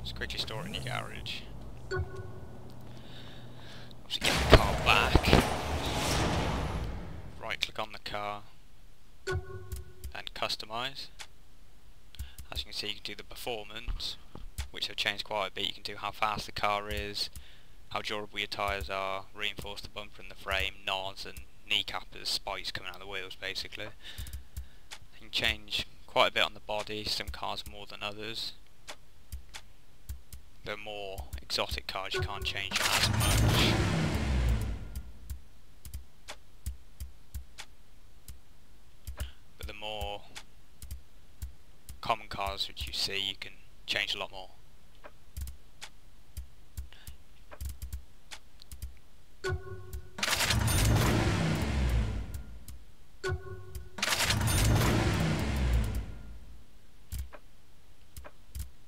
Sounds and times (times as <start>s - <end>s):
Speech: 0.0s - 1.6s, 4.1s - 5.5s, 7.4s - 8.6s, 10.1s - 11.2s, 12.4s - 17.3s, 17.9s - 24.0s, 25.1s - 28.6s, 30.6s - 33.7s, 39.6s - 40.4s, 42.0s - 44.6s.